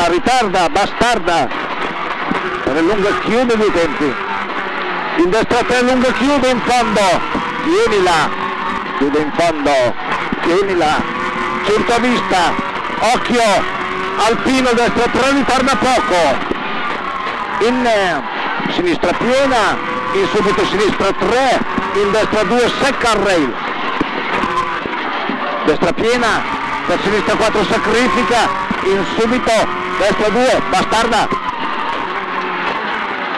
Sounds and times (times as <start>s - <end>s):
Speech: 0.0s - 1.5s, 2.7s - 4.2s, 5.2s - 8.4s, 9.0s - 16.4s, 17.6s - 23.6s, 25.6s - 31.4s
Car: 0.0s - 33.3s.